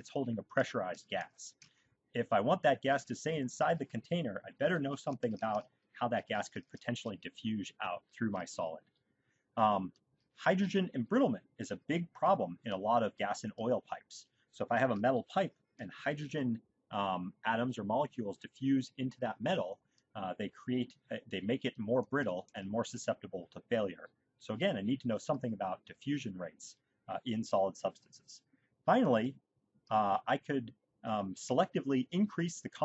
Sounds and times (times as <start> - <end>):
Speech: 0.0 - 8.9, 9.6 - 32.8.